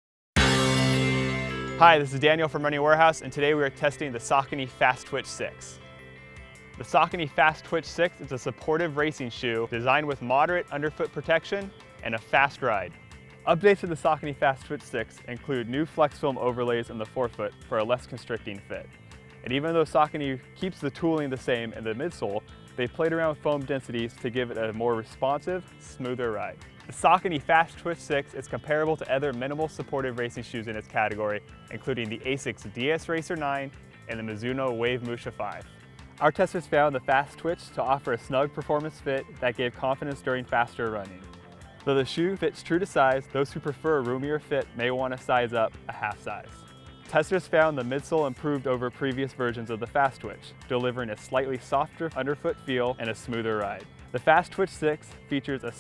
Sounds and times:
Music: 0.4 - 55.8
Speech: 1.8 - 5.8, 6.8 - 41.2, 41.9 - 55.8.

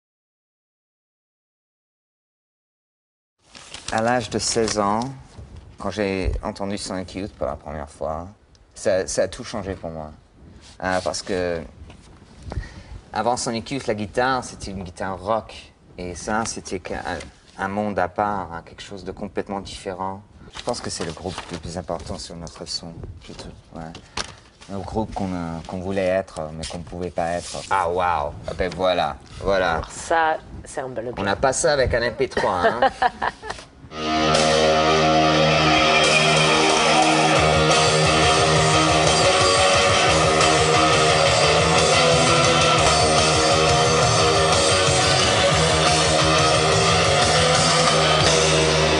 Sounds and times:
Speech: 3.9 - 5.2, 5.8 - 10.2, 10.8 - 11.7, 13.2 - 24.0, 24.7 - 32.9
Music: 33.9 - 49.0.

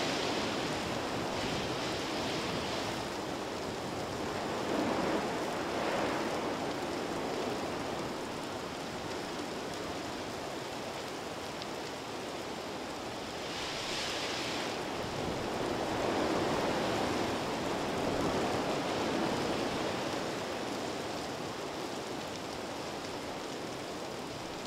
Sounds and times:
Wind noise (microphone): 0.0 - 10.0, 13.2 - 20.5
Fire: 0.0 - 24.6.

